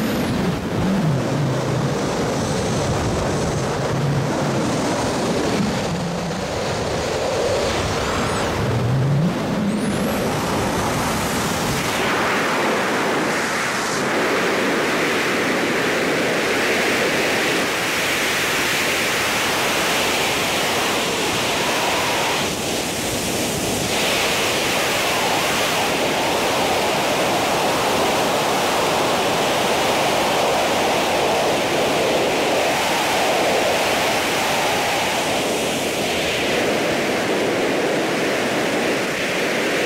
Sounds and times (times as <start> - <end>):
Outside, rural or natural: 0.0 - 39.8
Pink noise: 8.1 - 39.8.